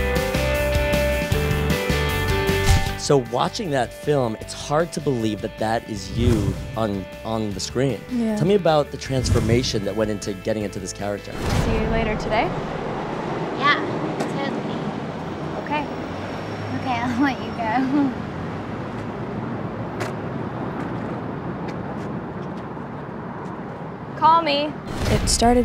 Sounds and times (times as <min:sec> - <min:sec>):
Outside, urban or manmade: 0:00.0 - 0:25.6
Speech: 0:03.0 - 0:12.5, 0:24.2 - 0:25.6.